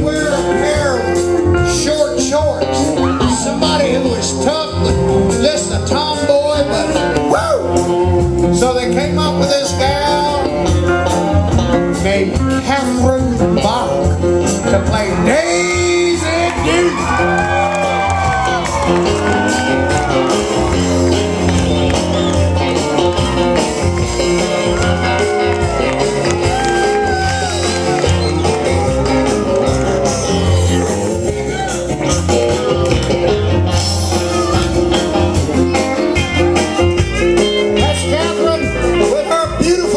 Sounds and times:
Music: 0.0s - 39.9s.

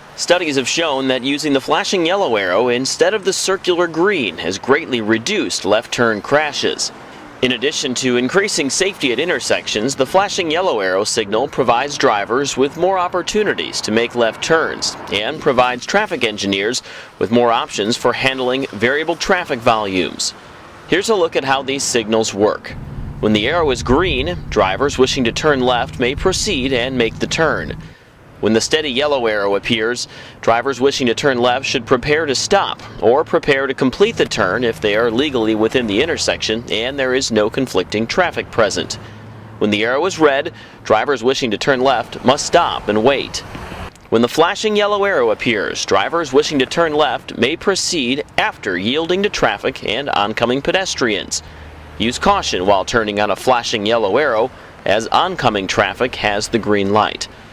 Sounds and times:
Speech: 0.2s - 43.5s, 44.1s - 57.4s.

